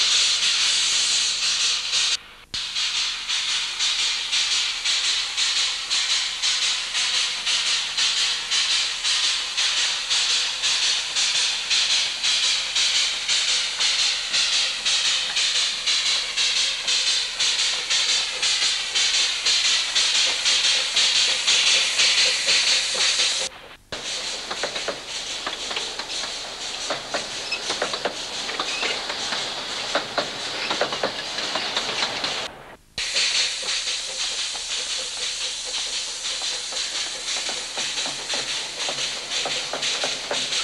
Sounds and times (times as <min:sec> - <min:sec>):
Hiss: 0:00.0 - 0:40.6.